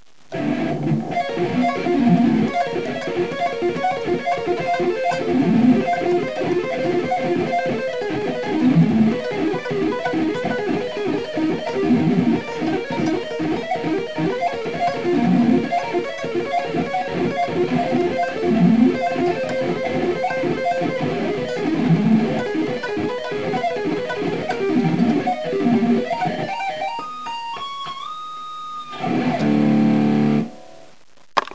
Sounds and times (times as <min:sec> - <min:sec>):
Electric guitar: 0:00.3 - 0:31.5.